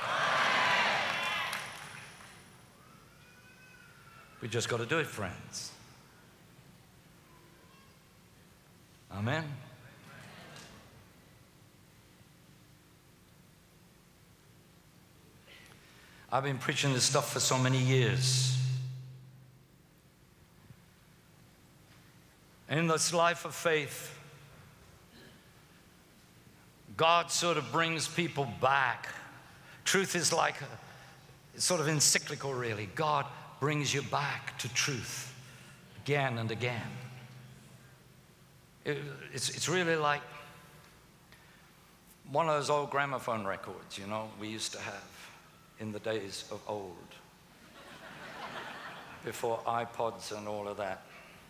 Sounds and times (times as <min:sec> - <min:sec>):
Speech: 0:04.4 - 0:05.8, 0:09.1 - 0:10.6, 0:16.3 - 0:19.0, 0:22.7 - 0:24.2, 0:26.9 - 0:30.8, 0:31.6 - 0:35.4, 0:36.0 - 0:37.3, 0:38.9 - 0:40.5, 0:42.3 - 0:47.3, 0:49.2 - 0:51.1.